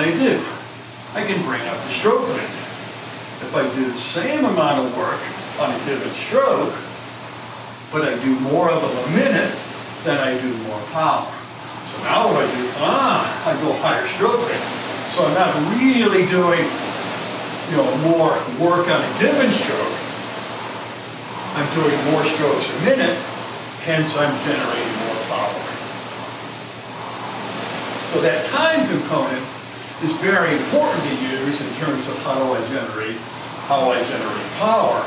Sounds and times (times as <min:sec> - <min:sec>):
Speech: 0:00.0 - 0:02.7, 0:03.4 - 0:06.9, 0:07.9 - 0:16.8, 0:17.7 - 0:20.1, 0:21.5 - 0:25.8, 0:28.1 - 0:35.0.